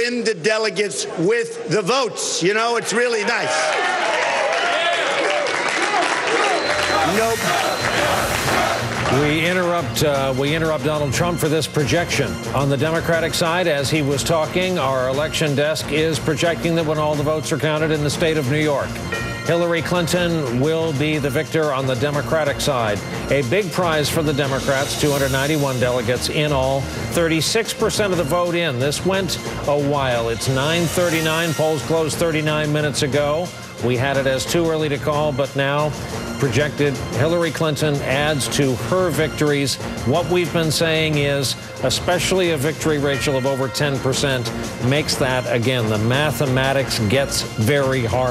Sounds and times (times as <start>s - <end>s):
Narration, monologue: 0.0s - 3.6s, 8.9s - 48.3s
Male speech, man speaking: 0.0s - 3.7s, 6.9s - 7.6s, 9.1s - 48.3s
Music: 5.5s - 48.3s.